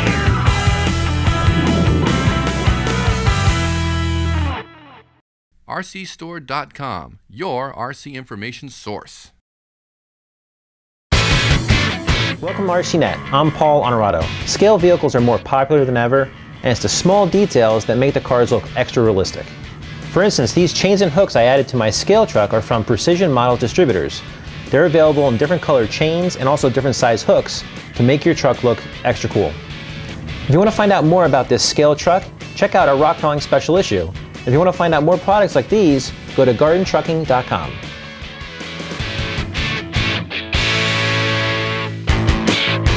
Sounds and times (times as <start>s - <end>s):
Music: 0.0s - 5.2s, 11.1s - 42.9s
Speech: 5.7s - 9.4s, 12.4s - 19.5s, 20.2s - 29.6s, 30.5s - 37.8s.